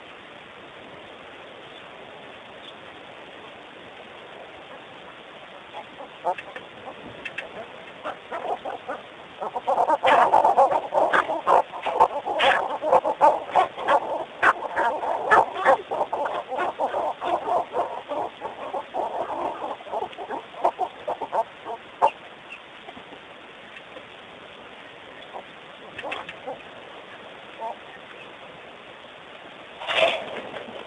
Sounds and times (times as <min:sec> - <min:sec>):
Fowl: 0:05.7 - 0:22.6, 0:25.3 - 0:26.7.